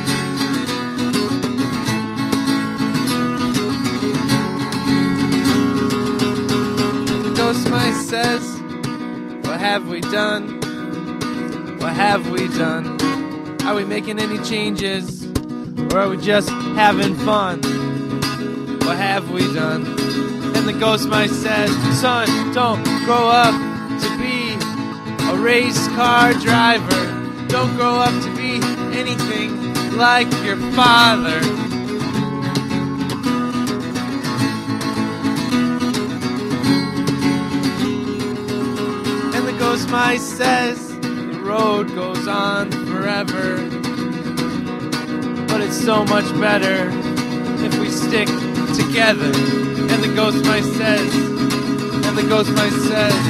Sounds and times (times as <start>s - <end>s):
Music: 0.0s - 53.3s.